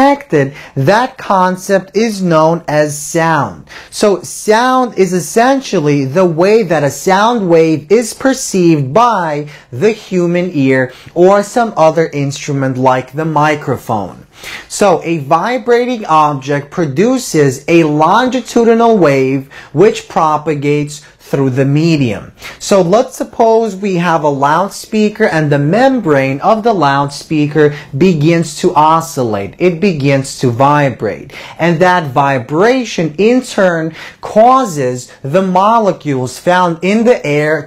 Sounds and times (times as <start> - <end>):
Speech: 0.0 - 37.6.